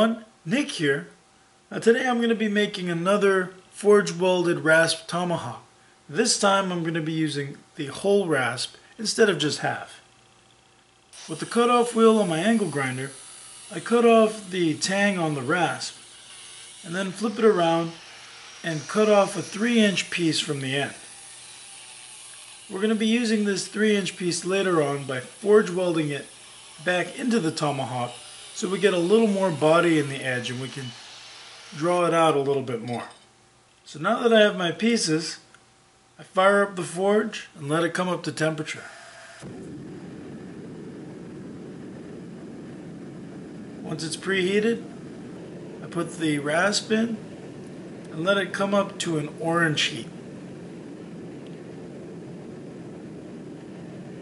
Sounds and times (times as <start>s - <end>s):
Speech: 0.0s - 10.0s, 11.3s - 16.0s, 16.8s - 18.0s, 18.7s - 21.0s, 22.7s - 31.0s, 31.8s - 33.2s, 33.9s - 35.5s, 36.2s - 38.9s, 43.9s - 44.9s, 45.8s - 47.2s, 48.1s - 50.1s.